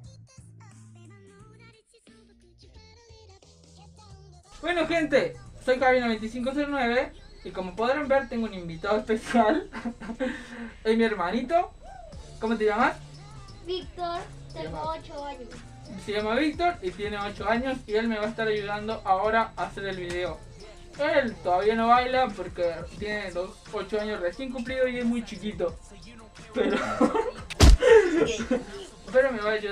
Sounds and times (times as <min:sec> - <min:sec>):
Music: 0:00.0 - 0:29.7
Speech: 0:21.0 - 0:25.8, 0:28.0 - 0:29.7.